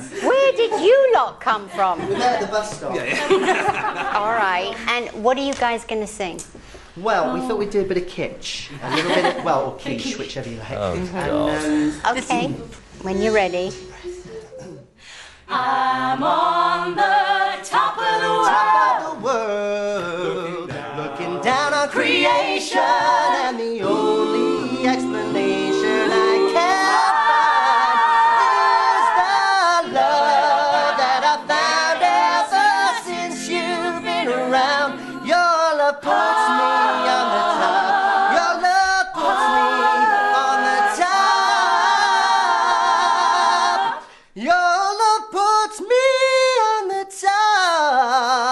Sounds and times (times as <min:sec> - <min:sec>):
A capella: 0:00.0 - 0:04.8, 0:06.5 - 0:07.8, 0:08.6 - 0:48.5.